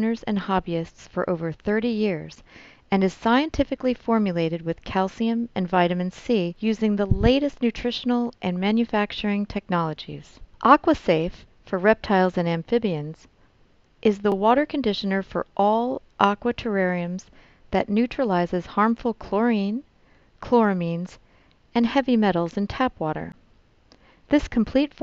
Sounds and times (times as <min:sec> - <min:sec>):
Speech: 0:00.0 - 0:13.2, 0:14.0 - 0:19.8, 0:20.4 - 0:21.2, 0:21.8 - 0:23.4, 0:24.3 - 0:25.0.